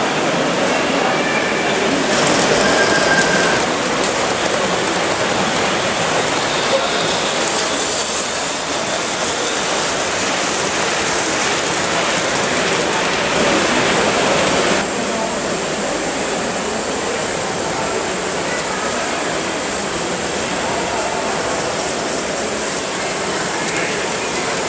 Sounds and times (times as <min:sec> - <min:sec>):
Steam: 0:00.0 - 0:24.6
Train: 0:00.0 - 0:24.6.